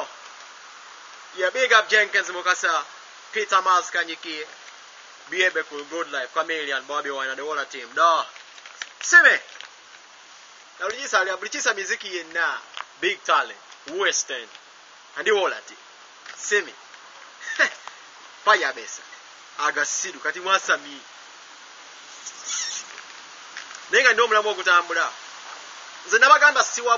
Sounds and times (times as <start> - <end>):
Speech: 1.4 - 4.5, 5.3 - 8.4, 9.0 - 9.5, 10.8 - 14.6, 15.2 - 15.8, 16.4 - 16.8, 18.5 - 21.1, 23.9 - 25.2, 26.1 - 26.9.